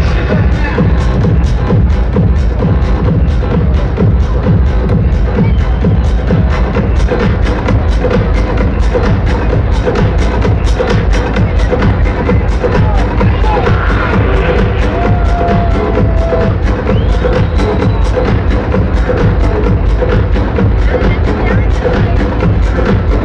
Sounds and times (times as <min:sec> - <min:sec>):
Speech: 0:00.0 - 0:01.2, 0:10.9 - 0:14.5, 0:20.5 - 0:23.2
Crowd: 0:00.0 - 0:23.2
Music: 0:00.0 - 0:23.2.